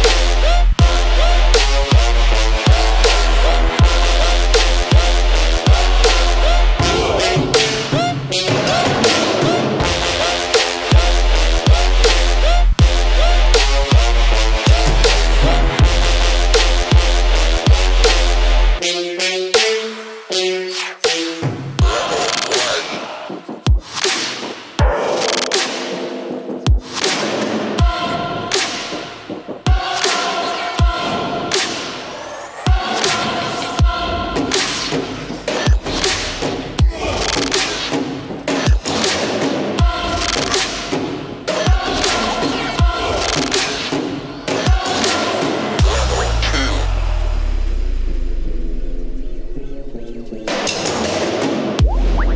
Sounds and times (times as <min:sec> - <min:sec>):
Music: 0:00.0 - 0:52.3.